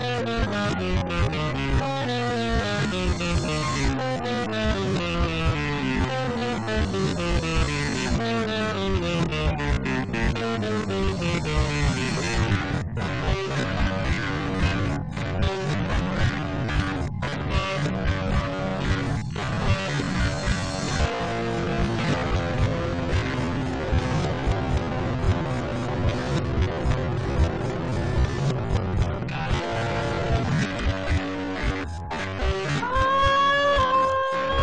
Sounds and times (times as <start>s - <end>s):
Bass guitar: 0.0s - 34.6s
Electric guitar: 0.0s - 34.6s.